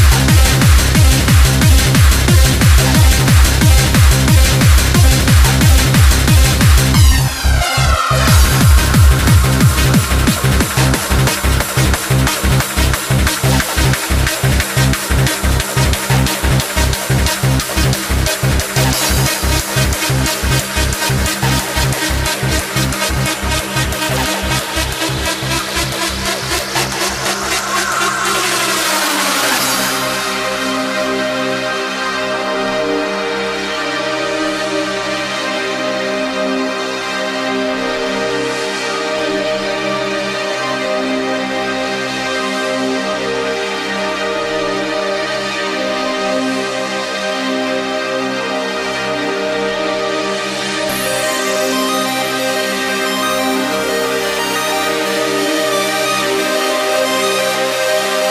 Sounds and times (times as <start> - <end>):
Techno: 0.0 - 58.3.